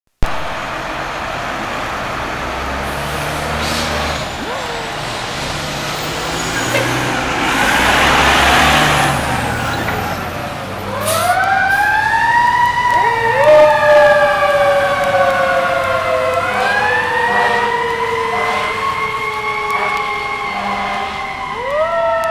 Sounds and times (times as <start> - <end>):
Truck: 0.2 - 22.3.